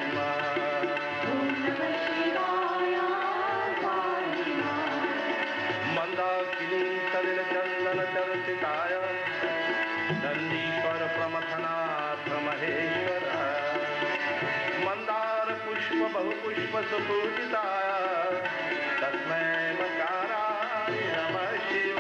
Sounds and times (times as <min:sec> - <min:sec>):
Tabla: 0:00.0 - 0:22.0.